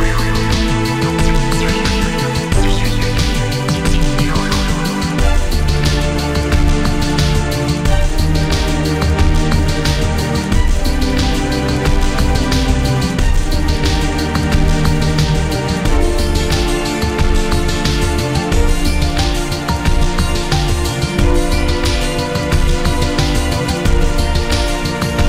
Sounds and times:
Video game music: 0:00.0 - 0:25.2.

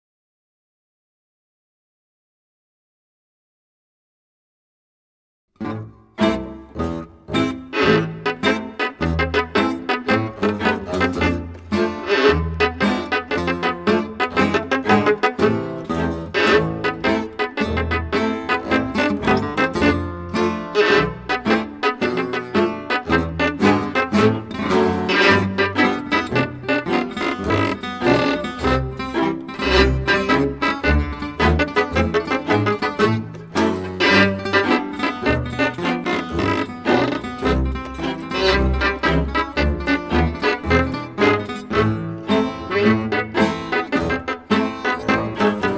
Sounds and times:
Pizzicato: 0:05.6 - 0:45.7.

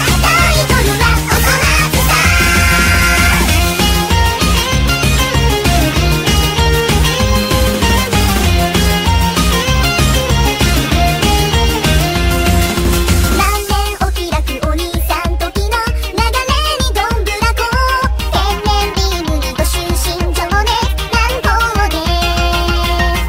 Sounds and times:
Singing: 0:00.0 - 0:03.5
Music: 0:00.0 - 0:23.2.

